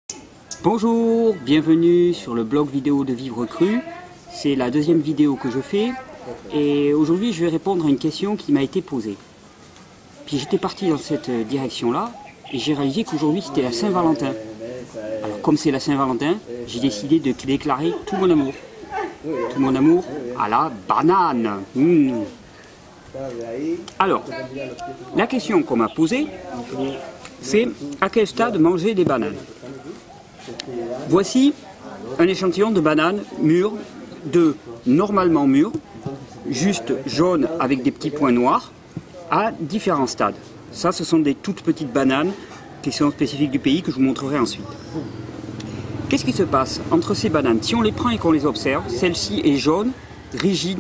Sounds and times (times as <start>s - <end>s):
Speech: 23.2s - 45.2s, 46.1s - 50.8s.